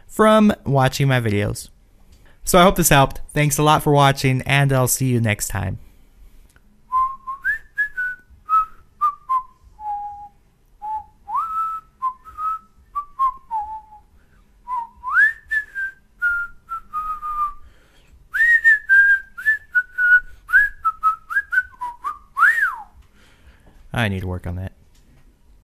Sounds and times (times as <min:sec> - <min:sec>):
Whistling: 0:06.9 - 0:17.7, 0:18.3 - 0:23.0.